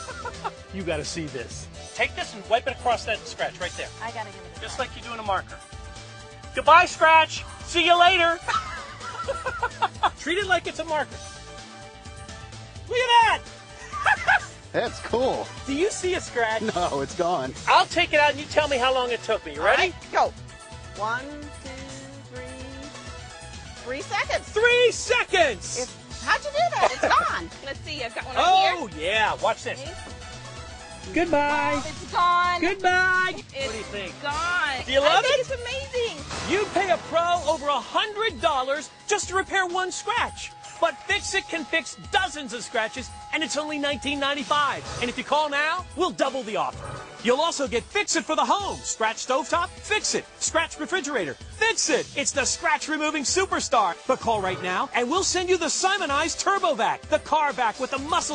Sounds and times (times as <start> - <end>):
Music: 0.0 - 58.3.